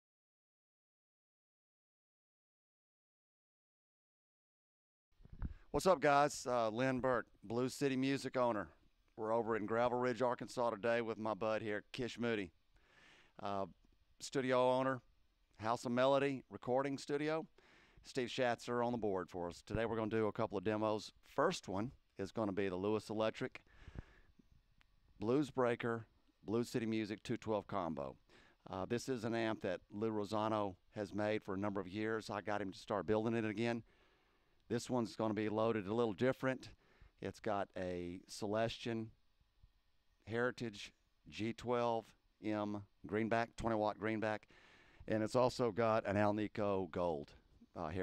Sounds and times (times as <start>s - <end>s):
Speech: 5.8s - 12.6s, 13.4s - 23.6s, 25.2s - 33.9s, 34.7s - 39.2s, 40.2s - 44.5s, 45.1s - 48.0s.